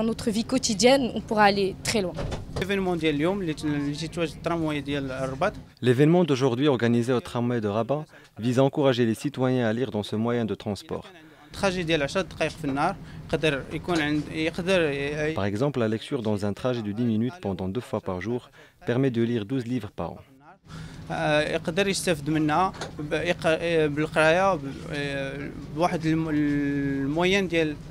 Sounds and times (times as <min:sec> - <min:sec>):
Speech: 0:00.0 - 0:20.5, 0:21.1 - 0:27.8.